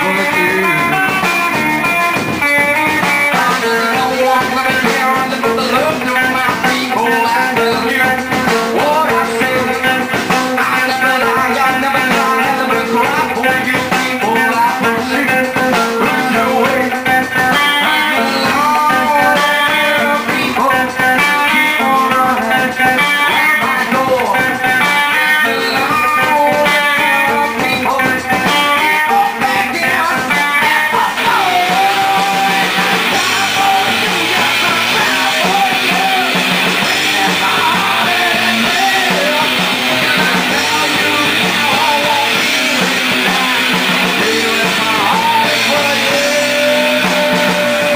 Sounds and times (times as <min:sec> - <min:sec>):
Music: 0:00.0 - 0:47.9
Singing: 0:00.0 - 0:47.9.